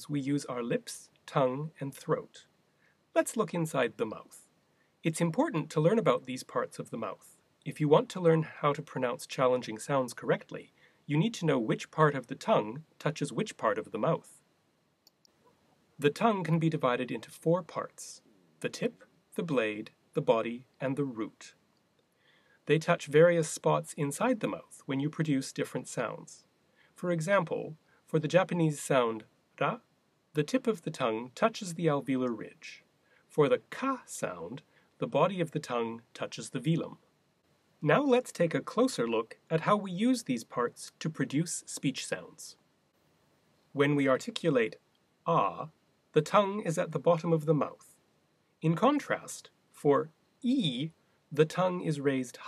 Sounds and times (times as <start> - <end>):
Male speech, man speaking: 0.0 - 2.5, 3.2 - 4.5, 5.1 - 14.4, 16.0 - 21.6, 22.7 - 29.8, 30.4 - 32.8, 33.4 - 37.0, 37.8 - 42.6, 43.8 - 47.9, 48.6 - 52.4
Narration, monologue: 0.0 - 52.4.